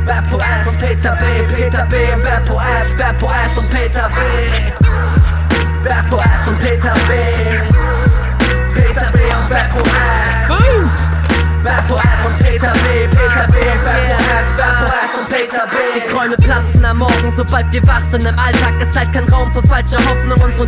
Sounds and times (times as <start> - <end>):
Music: 0.0 - 20.6.